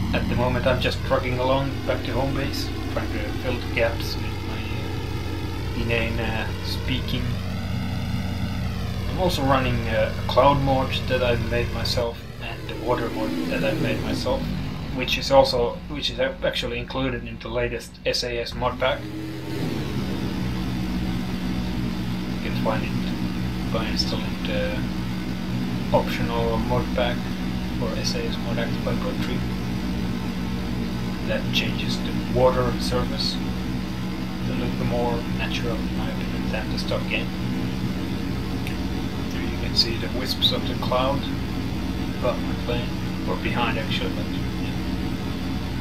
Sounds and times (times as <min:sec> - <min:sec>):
Propeller, airscrew: 0:00.0 - 0:17.0, 0:17.9 - 0:45.8
Fixed-wing aircraft, airplane: 0:00.0 - 0:45.8
Speech: 0:00.1 - 0:04.7, 0:05.8 - 0:07.4, 0:09.1 - 0:19.0, 0:22.4 - 0:24.9, 0:25.9 - 0:29.6, 0:31.2 - 0:33.4, 0:34.4 - 0:37.3, 0:39.3 - 0:41.4, 0:42.2 - 0:44.8.